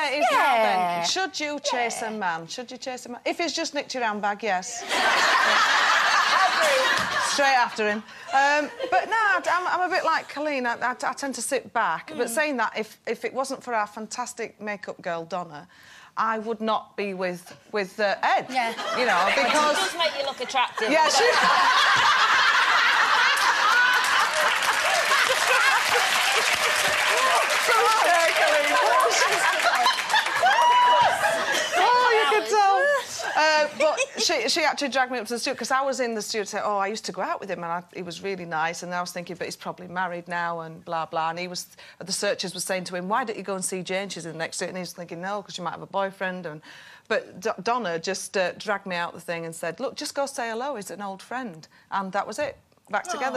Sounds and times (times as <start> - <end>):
Female speech, woman speaking: 0.0 - 4.9, 6.6 - 21.6, 31.8 - 53.3.